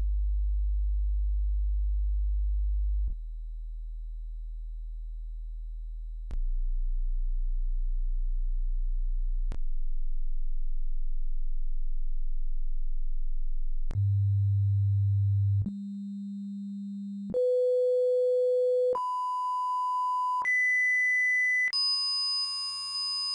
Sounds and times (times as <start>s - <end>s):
Chirp tone: 13.9s - 23.3s.